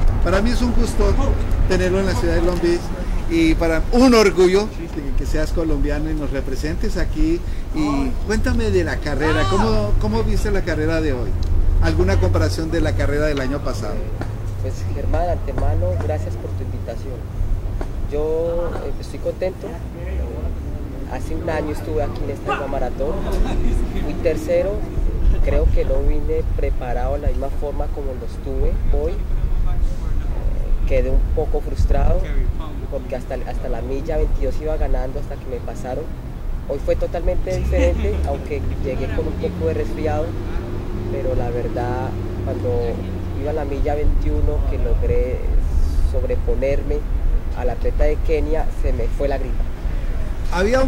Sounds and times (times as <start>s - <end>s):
Outside, urban or manmade: 0.0s - 50.8s
Male speech, man speaking: 0.2s - 17.2s, 18.1s - 36.1s, 36.7s - 49.6s, 50.4s - 50.8s.